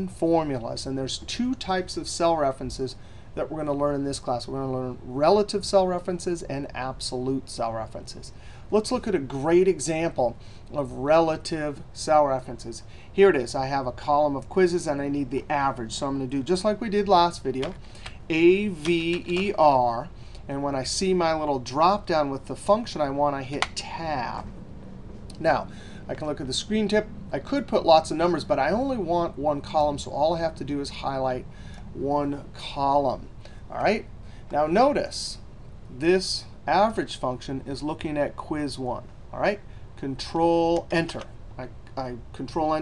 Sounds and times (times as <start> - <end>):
Speech: 0.0 - 24.5, 25.4 - 31.4, 32.0 - 42.8.